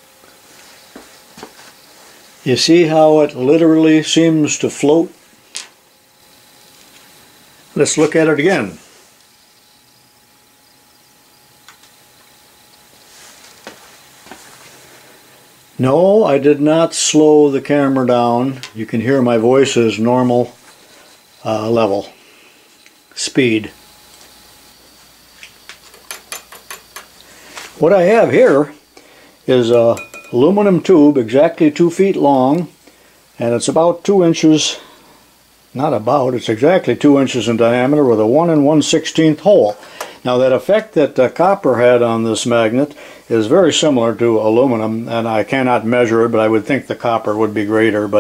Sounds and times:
Inside, small room: 0.0 - 48.2
Speech: 2.4 - 5.2, 7.8 - 8.9, 15.8 - 20.6, 21.4 - 22.2, 23.2 - 23.8, 27.8 - 28.8, 29.5 - 32.8, 33.4 - 34.9, 35.8 - 48.2.

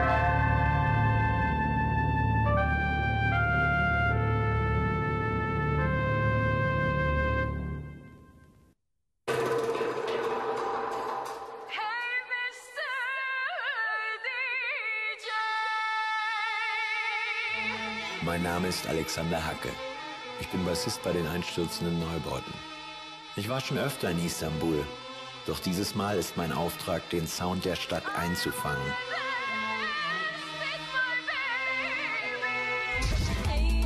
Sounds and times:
Music: 0.0 - 33.8
Speech: 18.2 - 19.8, 20.4 - 22.6, 23.4 - 24.9, 25.5 - 29.0.

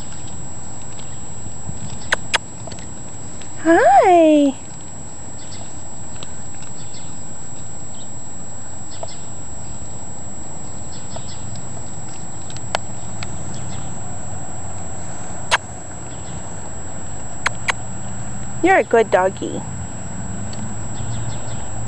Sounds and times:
Speech: 3.6 - 4.6, 18.6 - 19.7
Animal: 17.4 - 17.8.

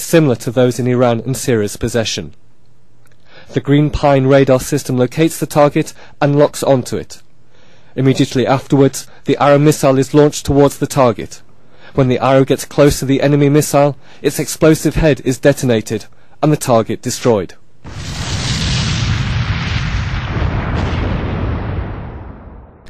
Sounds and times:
Speech: 0.0 - 2.4, 3.5 - 7.3, 8.0 - 17.6.

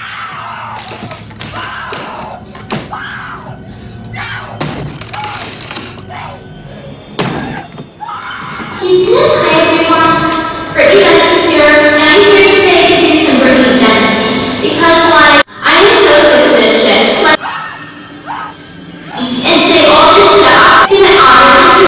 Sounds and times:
Speech: 8.8 - 17.4, 19.2 - 21.8.

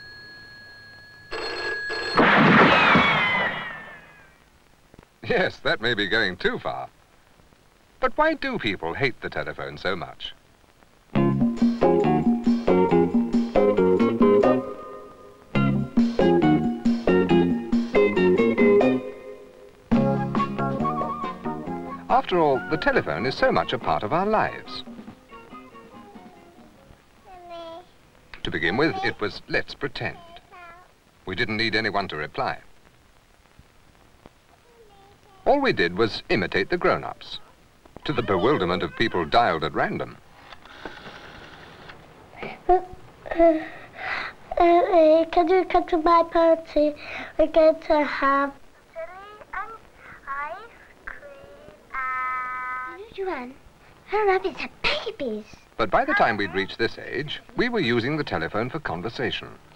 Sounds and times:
Music: 11.2 - 27.0.

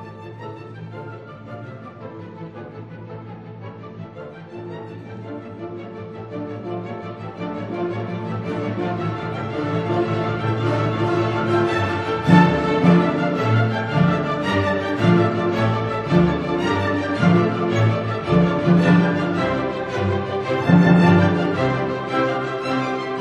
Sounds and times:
Music: 0.0 - 23.2.

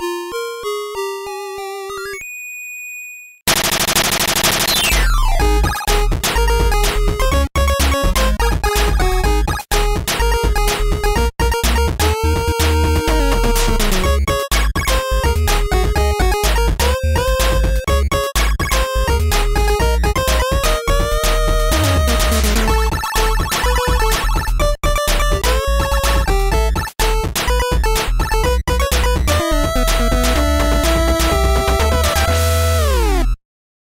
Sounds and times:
Music: 0.0 - 2.2, 4.9 - 33.4.

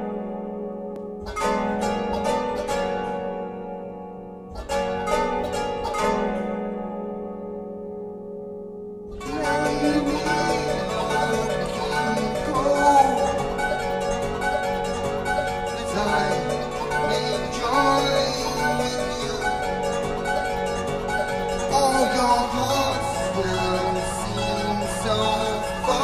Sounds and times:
Musical instrument: 0.0 - 26.0.

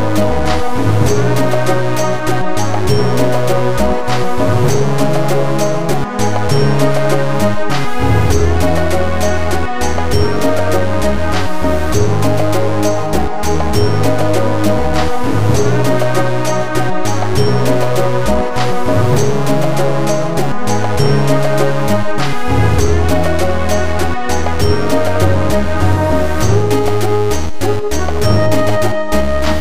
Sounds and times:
Exciting music: 0.0 - 29.6.

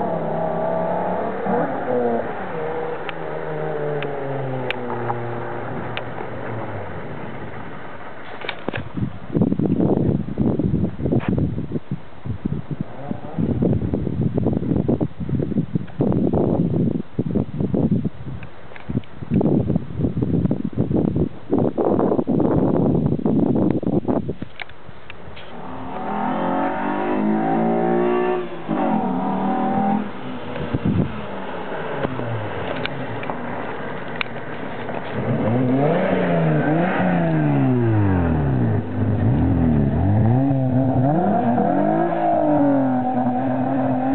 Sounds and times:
Accelerating, revving, vroom: 0.0 - 6.8, 25.5 - 30.9, 35.1 - 44.1
Car: 0.0 - 44.1.

